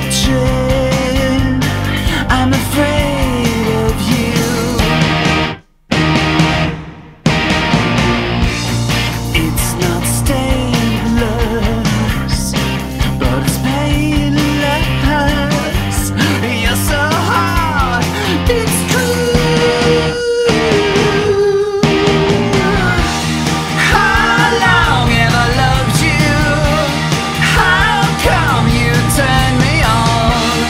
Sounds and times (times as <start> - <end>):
Grunge: 0.0 - 30.7
Guitar: 0.0 - 30.7.